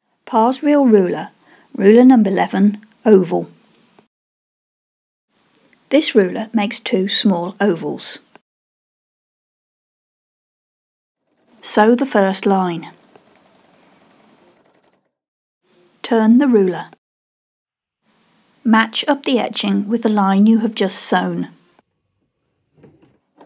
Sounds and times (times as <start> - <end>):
Speech: 0.3 - 3.6, 5.9 - 8.3, 11.6 - 13.0, 16.0 - 17.0, 18.7 - 21.6
Sewing machine: 11.2 - 11.7, 13.0 - 15.2.